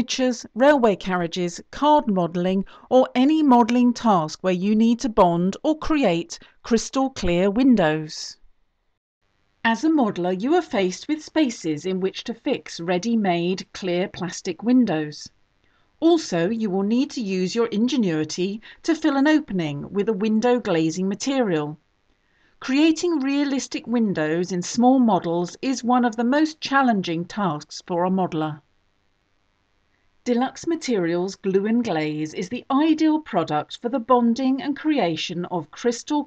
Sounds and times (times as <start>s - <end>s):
Narration, monologue: 0.0s - 36.2s.